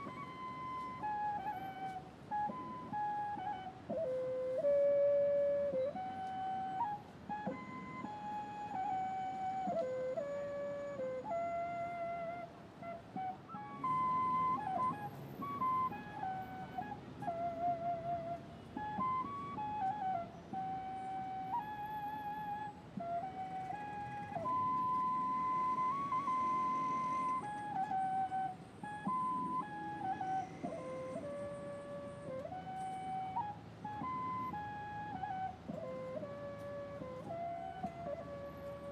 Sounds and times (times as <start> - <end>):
Flute: 0.0 - 38.9.